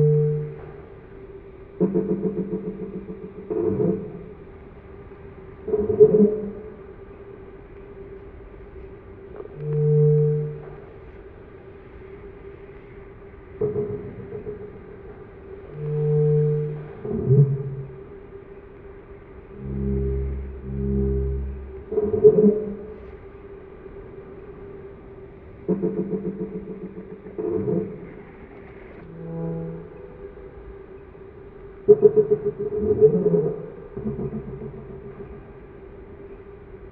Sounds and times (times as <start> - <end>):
Music: 0.0 - 36.9
Sound effect: 1.8 - 4.4, 13.6 - 18.0, 19.6 - 23.0, 25.7 - 30.6, 31.9 - 35.8.